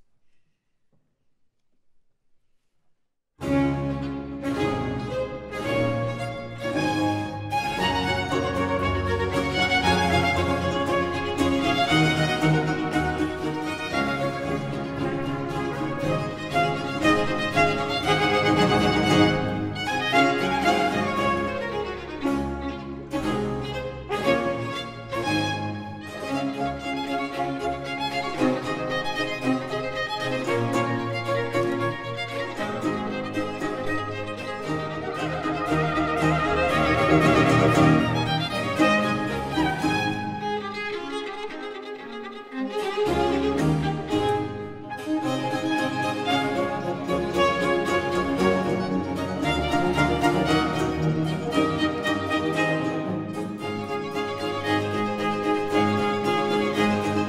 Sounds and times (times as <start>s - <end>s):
Trumpet: 3.4s - 26.6s, 28.4s - 40.2s
Cello: 3.4s - 57.2s
Violin, fiddle: 3.4s - 57.2s.